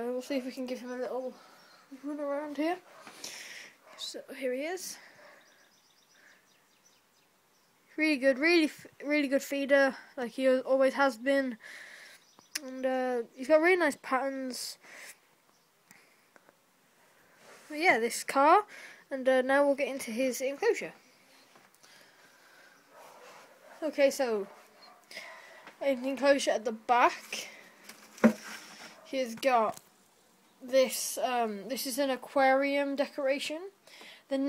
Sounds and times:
Speech: 0.0 - 1.4, 2.0 - 2.8, 4.0 - 5.0, 8.0 - 11.6, 12.6 - 14.8, 17.7 - 21.0, 23.8 - 24.5, 25.8 - 27.6, 29.1 - 29.8, 30.6 - 34.4.

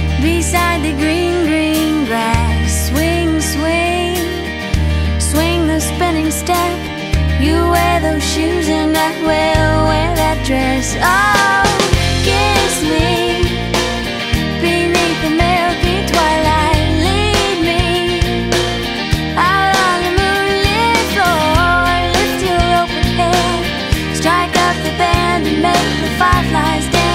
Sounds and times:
Soul music: 0.0 - 27.1.

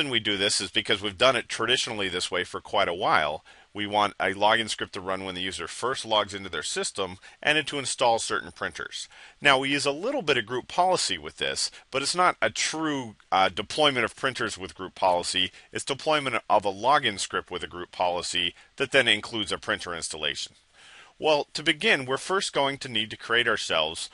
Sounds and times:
Speech: 0.0 - 20.6, 21.2 - 24.1.

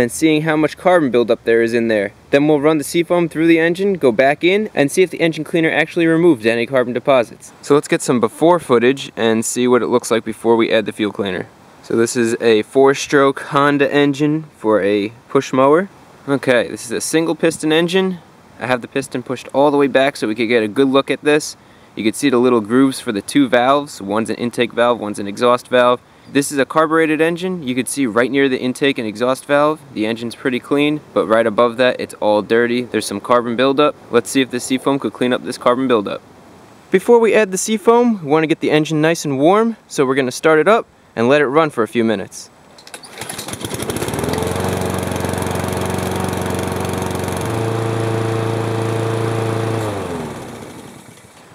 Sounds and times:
Speech: 0.0 - 36.2, 36.9 - 42.5.

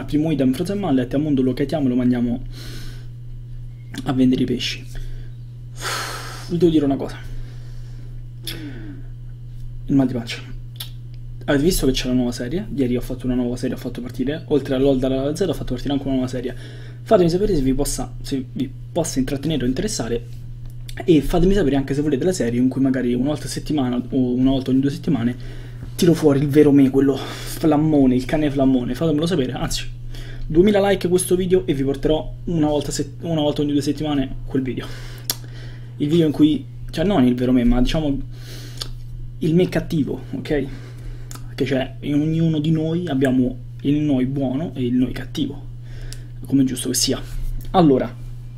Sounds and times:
Speech: 0.0 - 2.5, 4.0 - 4.9, 6.5 - 7.3, 9.9 - 10.6, 11.4 - 20.3, 20.9 - 25.4, 26.0 - 29.9, 30.5 - 34.9, 36.0 - 38.2, 39.4 - 40.8, 41.5 - 45.7, 46.4 - 48.2.

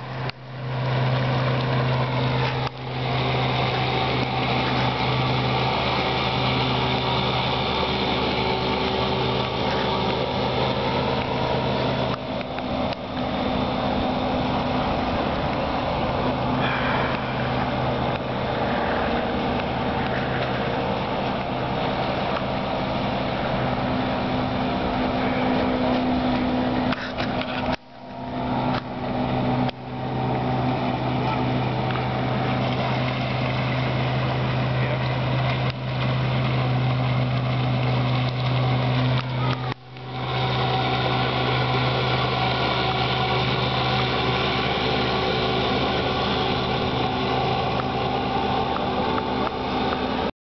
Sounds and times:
Speech: 34.8 - 35.2, 39.2 - 39.8.

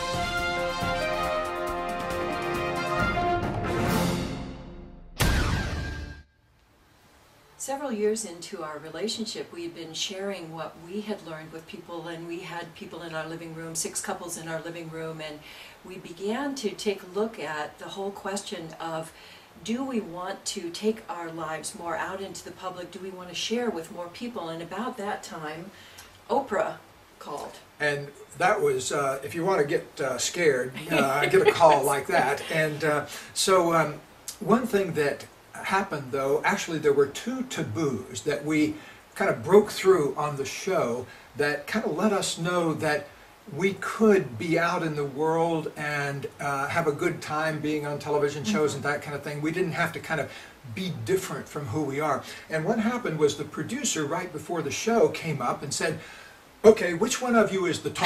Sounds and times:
Speech: 26.3 - 56.0, 56.6 - 58.0.

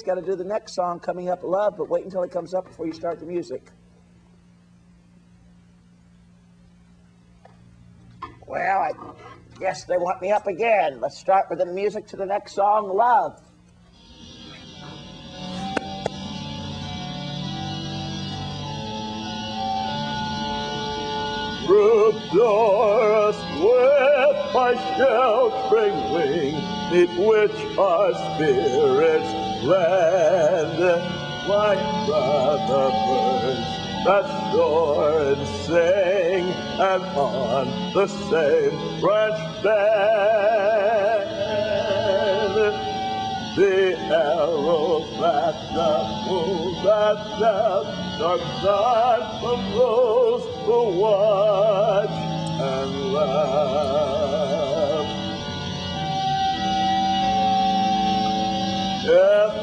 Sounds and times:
Music: 13.2 - 59.6
Male singing: 21.6 - 42.9, 43.6 - 55.2, 59.1 - 59.6
Synthetic singing: 21.7 - 42.8, 43.6 - 55.1.

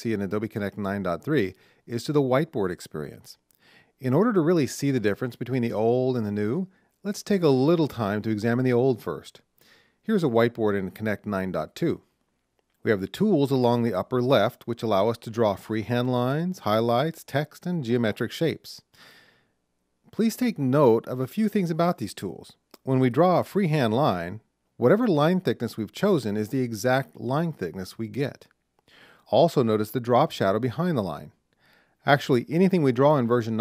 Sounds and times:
Speech: 0.0 - 9.5, 10.1 - 12.1, 12.8 - 18.9, 20.1 - 28.5, 29.2 - 31.4, 32.0 - 33.6.

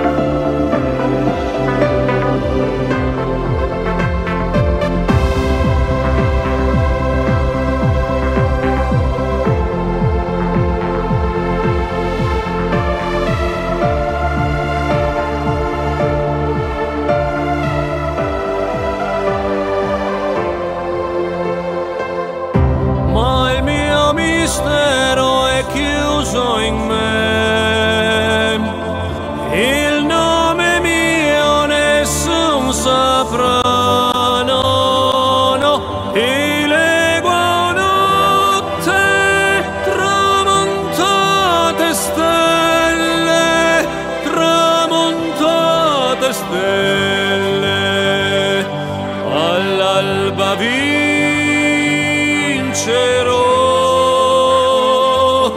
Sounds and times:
Music: 0.0 - 55.5.

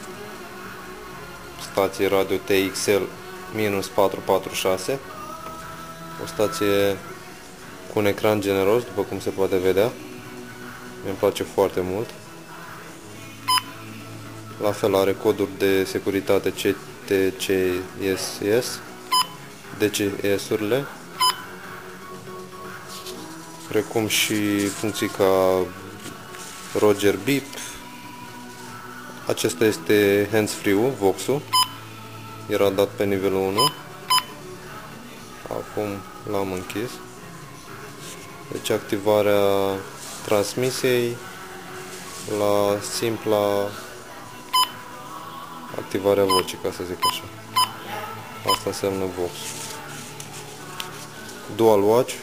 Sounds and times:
Music: 0.0 - 52.2
Speech: 1.6 - 5.1, 6.2 - 7.1, 7.9 - 10.0, 11.0 - 12.2, 14.6 - 18.8, 19.8 - 21.0, 23.7 - 25.8, 26.7 - 27.8, 29.3 - 31.5, 32.5 - 33.8, 35.4 - 37.0, 38.5 - 41.2, 42.3 - 43.9, 45.7 - 49.6, 51.5 - 52.2.

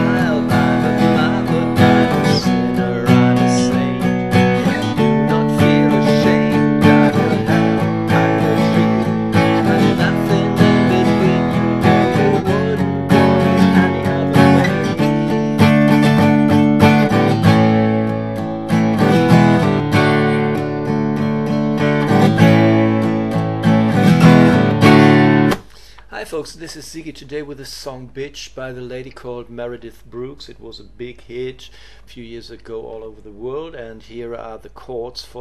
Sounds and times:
Strum: 0.0 - 26.0
Speech: 26.1 - 35.4.

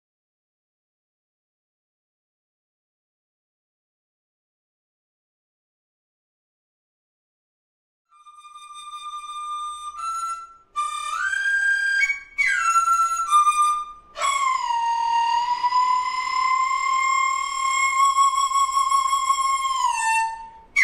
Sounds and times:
Inside, small room: 8.0 - 20.8
Flute: 8.1 - 20.8.

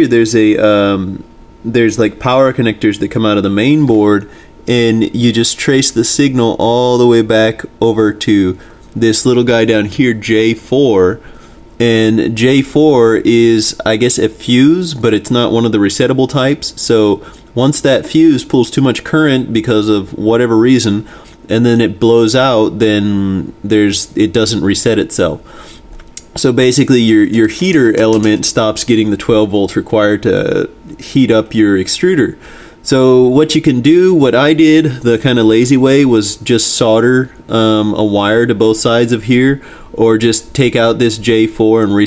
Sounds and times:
Speech: 0.0 - 25.5, 26.2 - 42.0.

